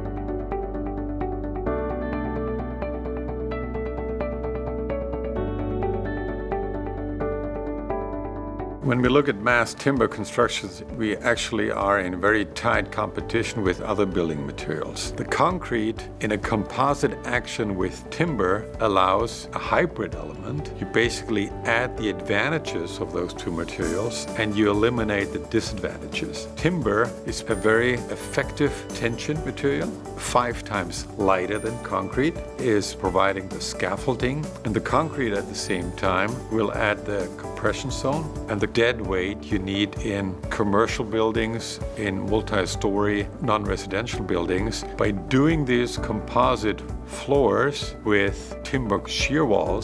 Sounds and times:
Music: 0:00.0 - 0:49.8
Speech: 0:08.8 - 0:49.8.

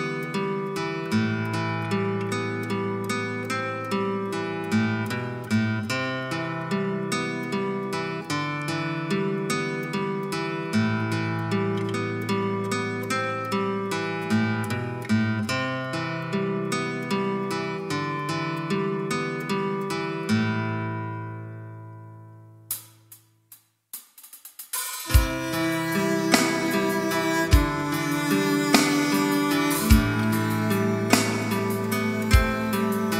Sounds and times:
Music: 0:00.0 - 0:33.1.

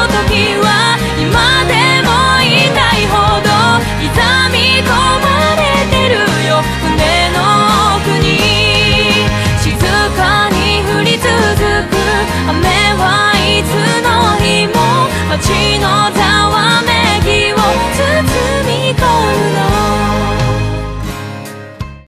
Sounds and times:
Music: 0:00.0 - 0:22.0.

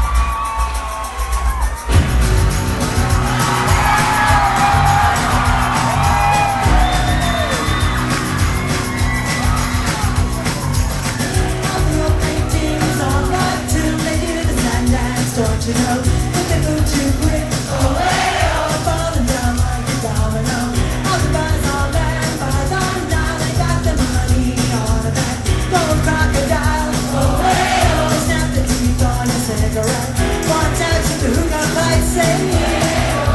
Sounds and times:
Music: 0:00.0 - 0:33.3.

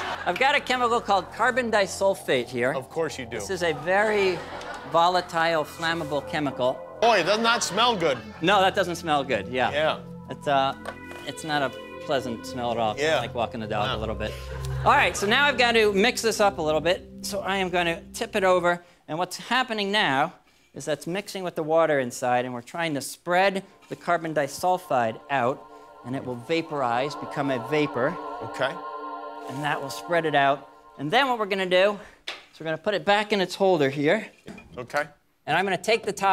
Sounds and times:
Music: 0:00.0 - 0:20.1, 0:22.3 - 0:32.1.

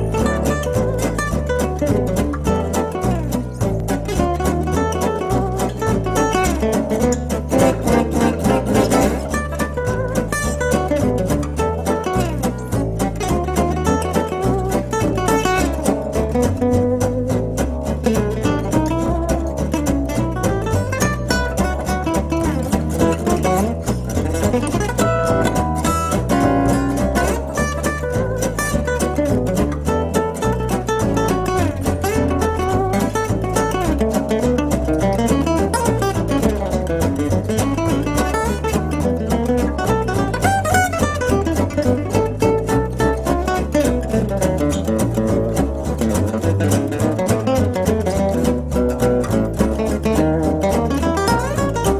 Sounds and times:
Strum: 0:00.0 - 0:51.9.

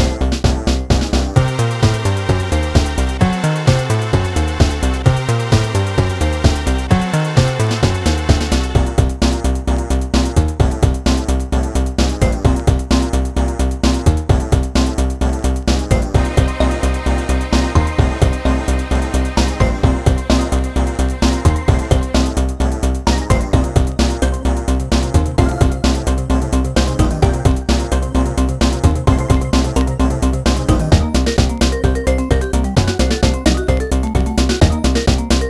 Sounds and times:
Music: 0:00.0 - 0:35.5.

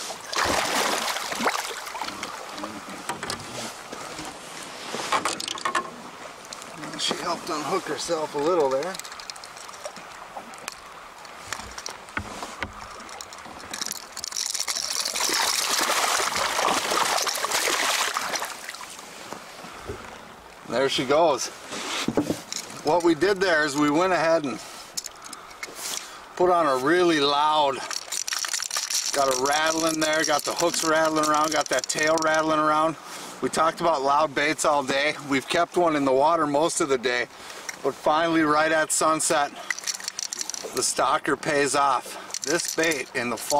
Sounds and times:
Outside, rural or natural: 0:00.0 - 0:43.5
Speech: 0:06.8 - 0:09.0, 0:20.7 - 0:21.5, 0:22.9 - 0:24.6, 0:26.4 - 0:27.9, 0:29.2 - 0:39.6, 0:40.8 - 0:43.5.

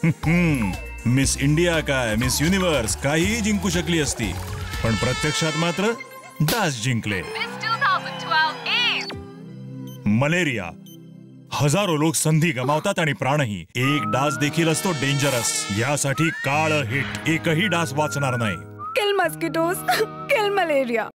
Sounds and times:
Mosquito: 0:04.3 - 0:06.0, 0:14.8 - 0:15.8.

